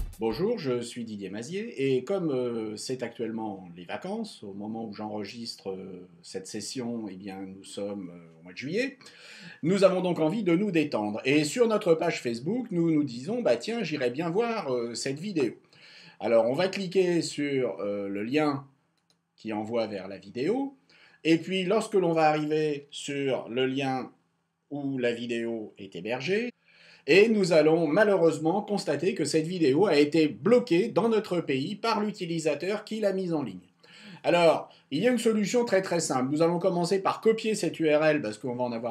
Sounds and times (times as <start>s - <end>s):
Speech: 0.0s - 15.6s, 16.2s - 18.6s, 19.4s - 24.1s, 24.7s - 38.9s.